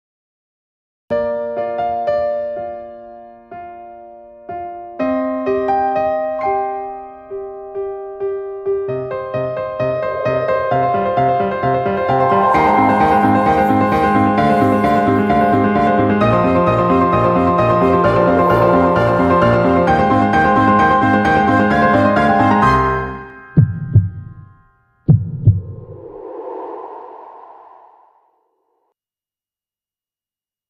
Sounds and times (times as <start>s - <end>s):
Electric piano: 1.2s - 23.6s.